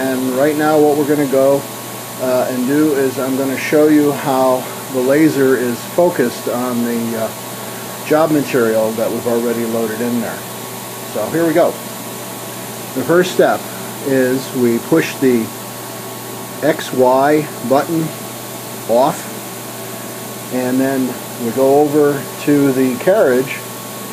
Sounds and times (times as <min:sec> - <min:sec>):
Speech: 0:00.0 - 0:07.4, 0:08.0 - 0:10.4, 0:11.1 - 0:11.8, 0:13.0 - 0:15.6, 0:16.6 - 0:18.2, 0:18.9 - 0:19.4, 0:20.5 - 0:23.7.